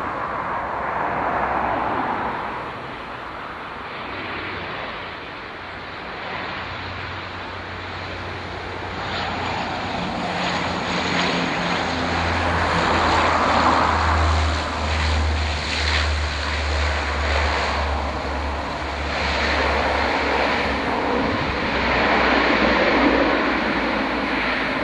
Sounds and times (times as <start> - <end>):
Fixed-wing aircraft, airplane: 0.0 - 24.8
Propeller, airscrew: 0.0 - 24.8.